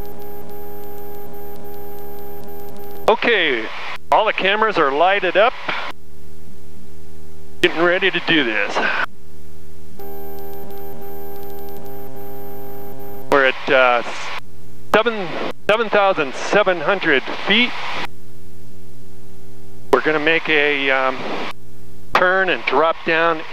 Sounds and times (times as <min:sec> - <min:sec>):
Speech: 0:03.1 - 0:05.8, 0:07.6 - 0:09.1, 0:13.3 - 0:14.4, 0:15.0 - 0:17.8, 0:20.0 - 0:21.2, 0:22.2 - 0:23.5.